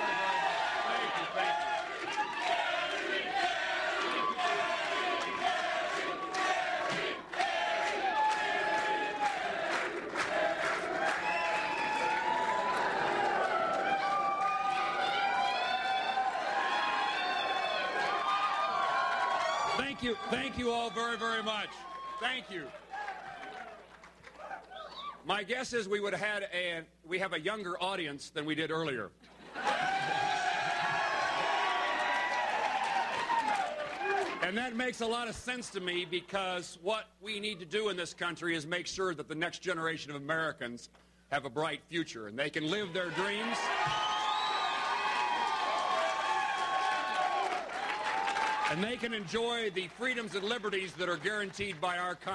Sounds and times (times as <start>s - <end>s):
Male speech, man speaking: 19.8s - 22.7s, 25.3s - 29.1s, 34.4s - 43.7s, 48.7s - 52.3s.